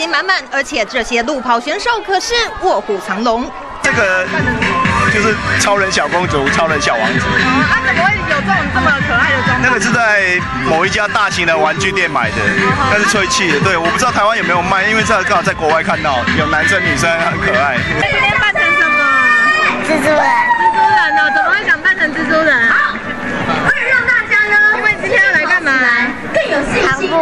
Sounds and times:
Outside, urban or manmade: 0:00.0 - 0:27.2
Music: 0:03.8 - 0:27.2.

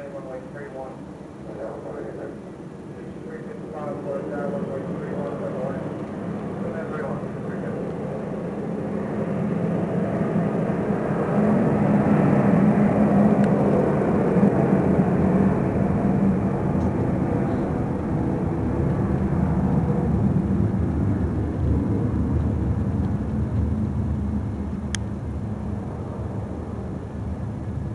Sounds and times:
Speech: 0:00.0 - 0:02.4, 0:03.0 - 0:05.9, 0:06.6 - 0:07.9
Aircraft: 0:00.0 - 0:27.9.

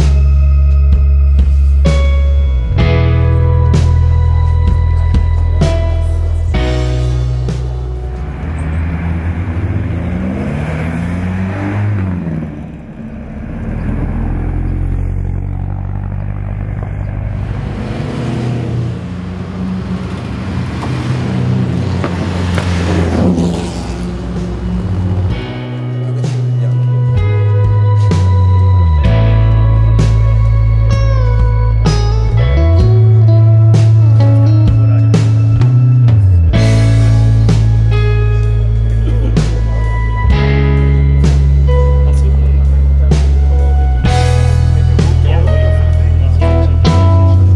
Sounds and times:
Music: 0:00.0 - 0:10.3, 0:24.4 - 0:47.5
Race car, auto racing: 0:00.0 - 0:47.5.

